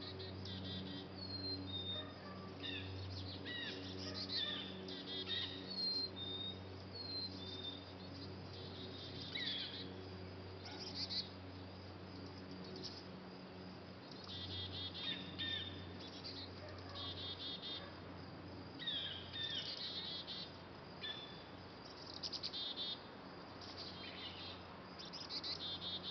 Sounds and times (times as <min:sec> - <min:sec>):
Chirp, tweet: 0:00.0 - 0:10.0, 0:10.6 - 0:11.3, 0:14.1 - 0:17.9, 0:18.8 - 0:23.0, 0:23.6 - 0:26.1.